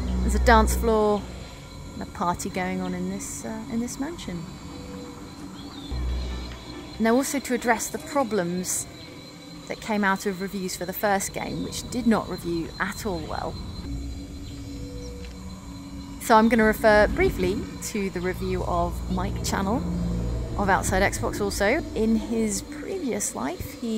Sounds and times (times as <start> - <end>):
Music: 0.0 - 23.9
Speech: 0.3 - 1.2, 2.0 - 4.5, 7.0 - 8.8, 9.7 - 13.5, 16.2 - 19.8, 20.6 - 23.9.